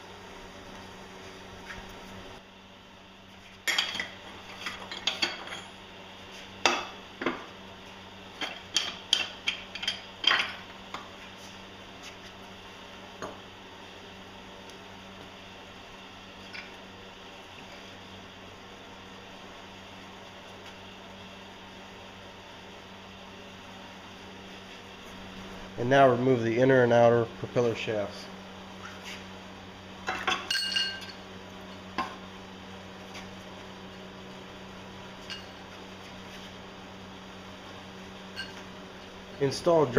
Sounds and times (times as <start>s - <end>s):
Speech: 25.8s - 28.3s, 39.4s - 39.9s.